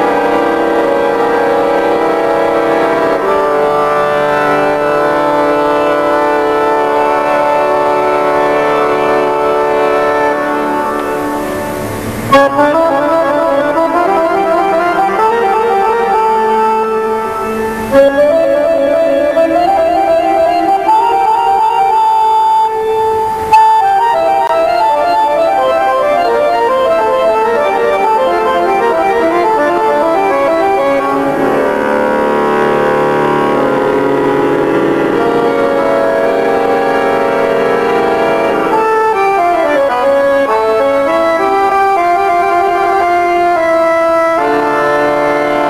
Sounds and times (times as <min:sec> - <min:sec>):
Music: 0:00.0 - 0:45.7.